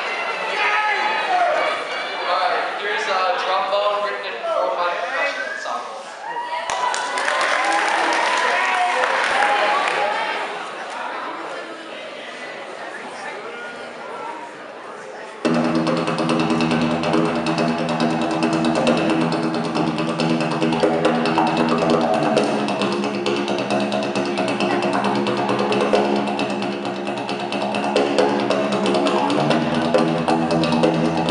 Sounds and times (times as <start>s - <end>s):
Speech: 0.3s - 6.2s, 8.4s - 15.5s.